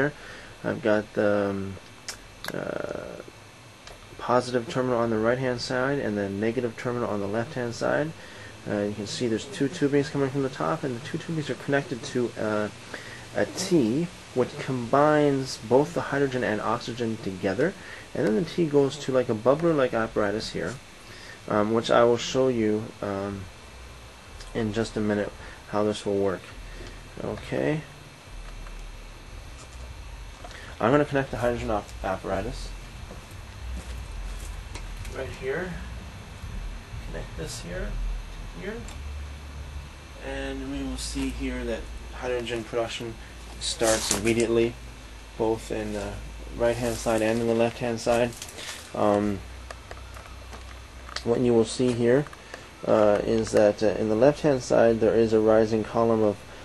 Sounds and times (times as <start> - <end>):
Speech: 0.0 - 1.9, 2.5 - 3.3, 4.2 - 12.8, 13.4 - 20.8, 21.5 - 23.5, 24.4 - 26.6, 27.2 - 28.0, 30.8 - 32.8, 35.1 - 35.9, 37.1 - 38.0, 38.6 - 38.9, 40.2 - 44.8, 45.4 - 49.5, 51.2 - 56.4.